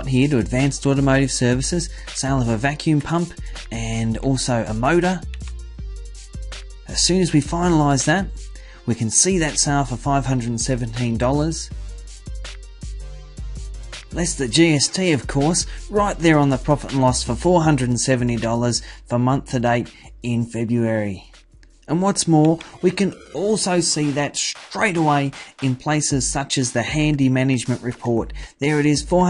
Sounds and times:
Narration, monologue: 0.0s - 29.2s.

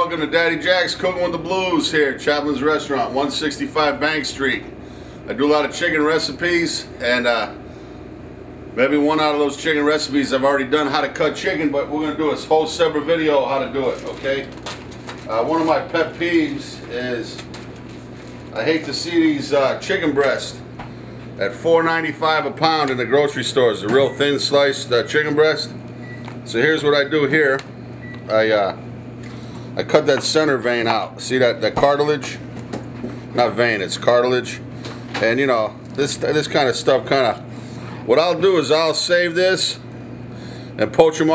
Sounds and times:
Speech: 0.0s - 4.7s, 5.3s - 7.6s, 8.8s - 14.6s, 15.3s - 17.5s, 18.5s - 20.6s, 21.4s - 25.8s, 26.5s - 28.8s, 29.8s - 32.4s, 33.4s - 39.9s, 40.8s - 41.3s.

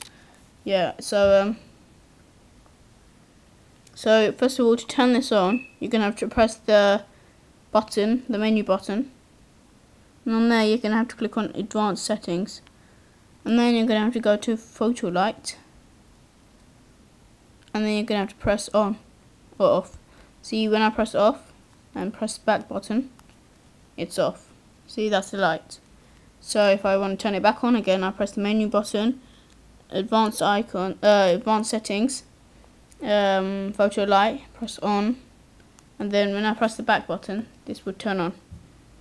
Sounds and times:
Speech: 0.6s - 1.7s, 4.0s - 7.1s, 7.7s - 9.2s, 10.2s - 12.7s, 13.4s - 15.7s, 17.7s - 19.0s, 19.6s - 23.2s, 24.0s - 29.2s, 29.9s - 32.3s, 33.0s - 35.3s, 36.0s - 38.4s.

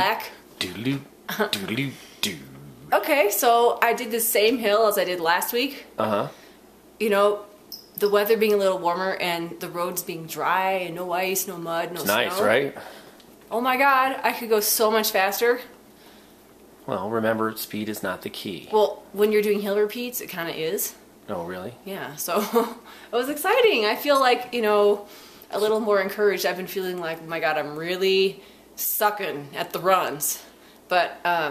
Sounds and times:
Speech: 0.0s - 6.3s, 8.0s - 12.8s, 16.9s - 22.3s, 23.2s - 31.5s.

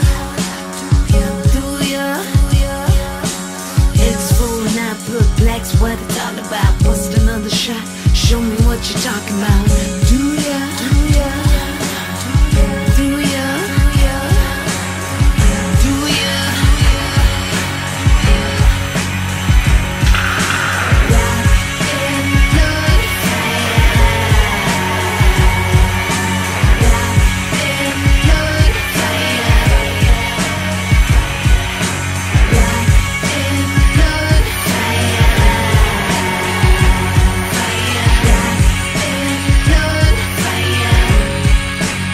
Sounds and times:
Music: 0.0s - 42.1s.

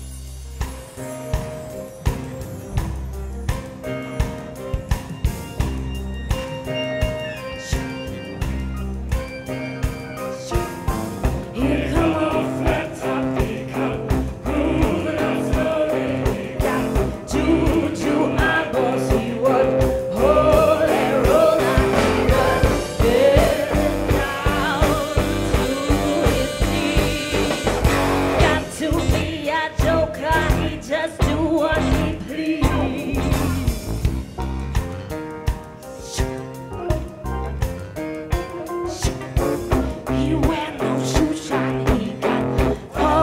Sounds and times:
Music: 0.0s - 43.2s.

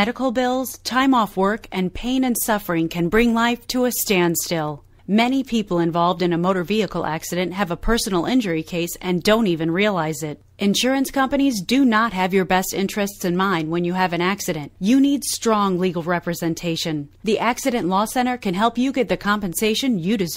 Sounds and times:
Speech: 0.0s - 20.3s.

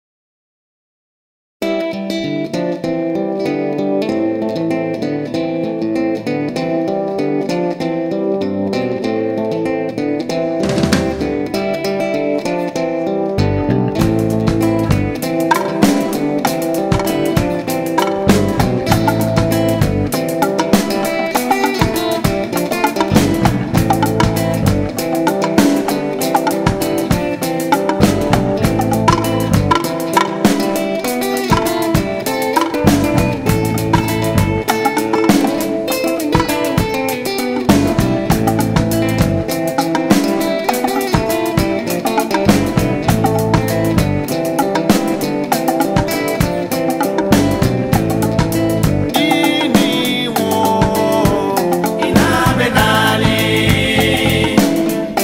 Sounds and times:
Guitar: 1.6s - 55.2s.

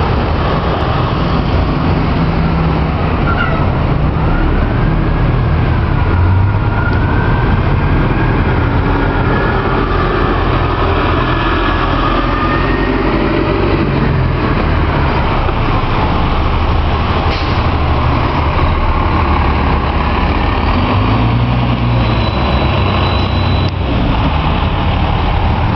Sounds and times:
Bus: 0.0s - 25.7s
Outside, urban or manmade: 0.0s - 25.7s.

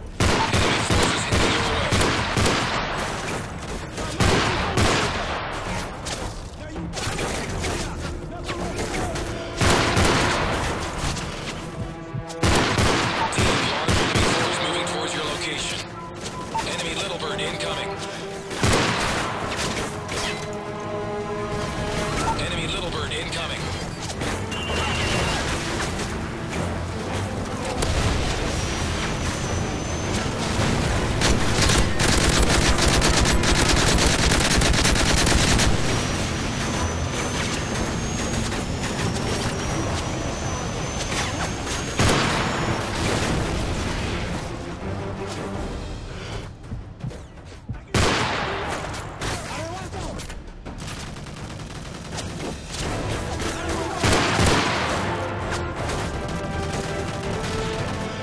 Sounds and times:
Music: 6.1s - 58.2s
Speech: 14.4s - 15.9s, 16.6s - 18.0s, 22.2s - 23.7s, 49.4s - 50.3s.

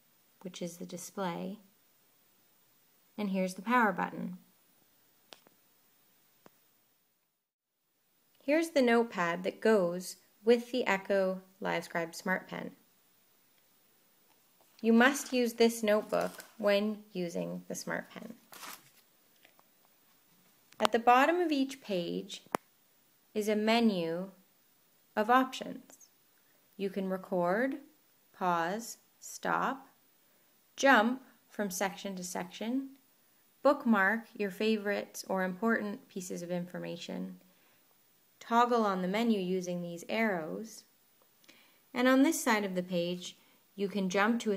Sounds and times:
Speech: 0.4s - 1.6s, 3.2s - 4.4s, 8.4s - 12.8s, 14.8s - 18.4s, 20.8s - 22.5s, 23.4s - 24.4s, 25.2s - 26.1s, 26.8s - 30.0s, 30.8s - 33.0s, 33.6s - 37.4s, 38.4s - 40.9s, 41.9s - 44.5s.

